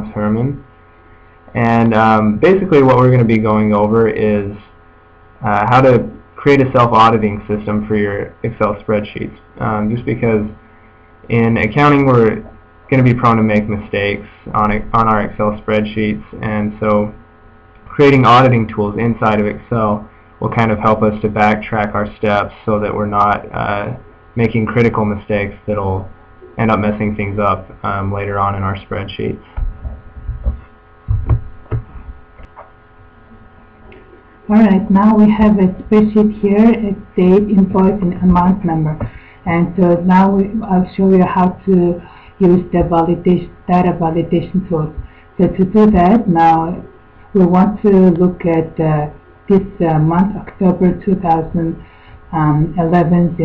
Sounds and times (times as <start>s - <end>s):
Speech: 0.0s - 0.7s, 1.5s - 4.8s, 5.4s - 10.6s, 11.3s - 17.2s, 17.8s - 29.6s, 34.0s - 53.4s.